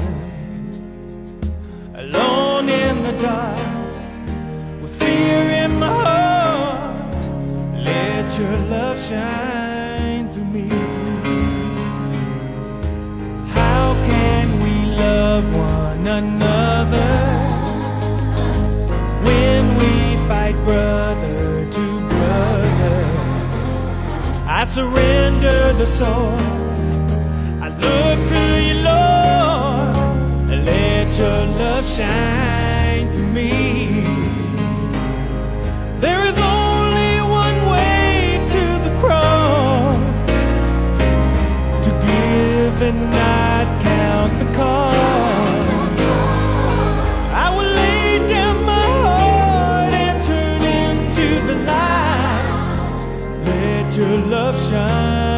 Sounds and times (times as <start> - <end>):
Male singing: 0.0 - 0.8, 2.0 - 12.1, 13.4 - 27.0, 27.6 - 34.8, 36.0 - 40.6, 41.8 - 55.3
Music: 0.0 - 55.3.